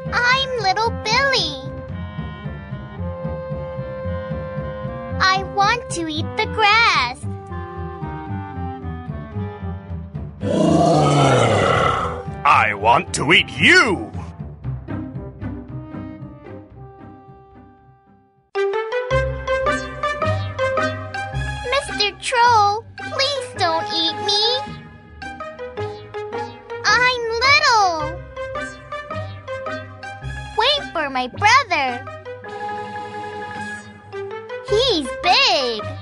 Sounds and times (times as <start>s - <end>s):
Music: 0.0s - 36.0s
Speech: 5.2s - 7.2s, 12.5s - 14.3s, 21.7s - 24.6s, 26.9s - 28.1s, 30.6s - 32.0s, 34.7s - 35.9s.